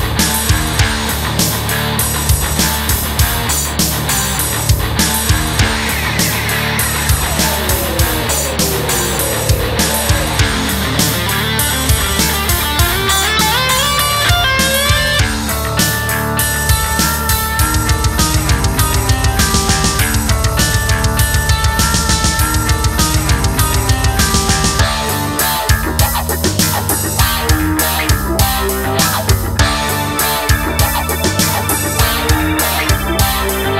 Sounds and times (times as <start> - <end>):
Music: 0.0 - 33.8.